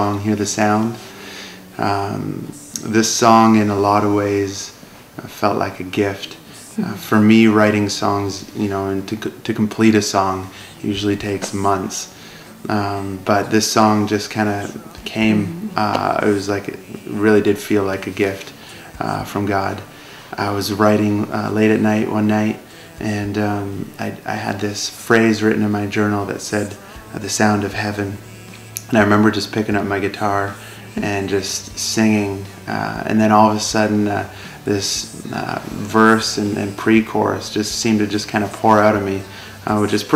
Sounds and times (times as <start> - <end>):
Music: 0.0 - 40.1
Speech: 0.0 - 40.1.